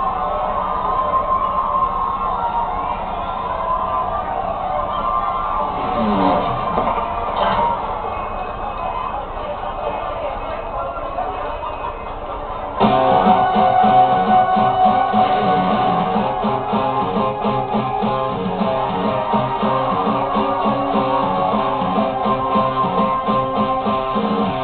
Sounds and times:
Bass guitar: 0:05.8 - 0:07.2, 0:12.8 - 0:24.6.

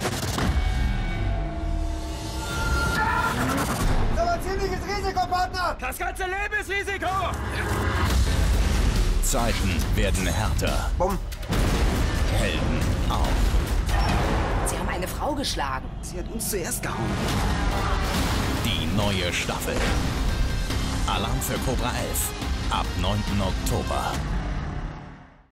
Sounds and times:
Music: 0:00.0 - 0:25.5
Speech: 0:18.7 - 0:19.9, 0:21.1 - 0:24.2.

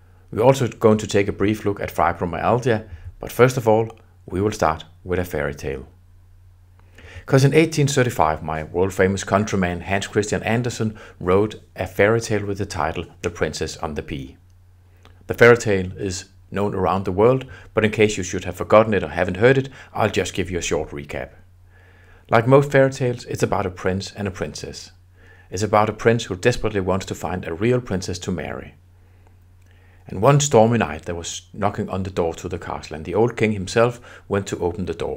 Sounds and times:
Speech: 0:00.3 - 0:06.0, 0:07.2 - 0:14.4, 0:15.3 - 0:21.4, 0:22.3 - 0:28.8, 0:30.0 - 0:35.1.

